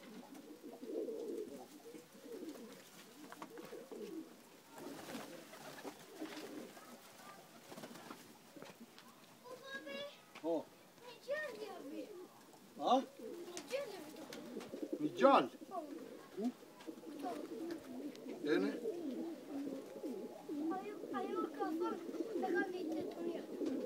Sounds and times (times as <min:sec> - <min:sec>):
Pigeon, dove: 0:00.0 - 0:10.0, 0:11.4 - 0:23.8.